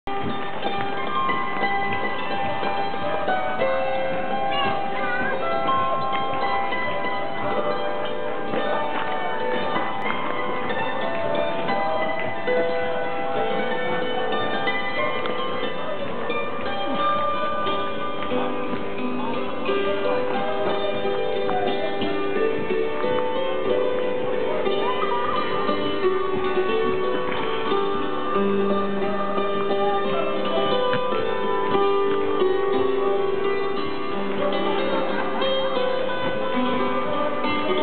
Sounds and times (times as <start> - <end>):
Musical instrument: 0.1 - 37.8
Speech: 1.9 - 37.8.